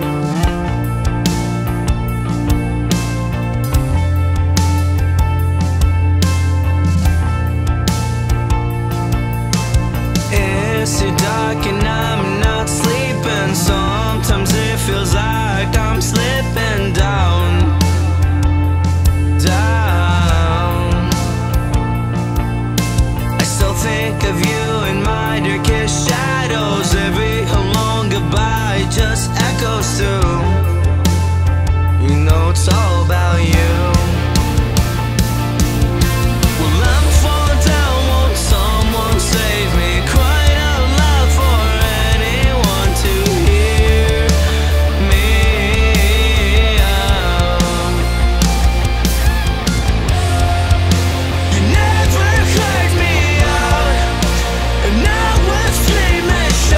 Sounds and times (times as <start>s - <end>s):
Music: 0.0s - 56.7s.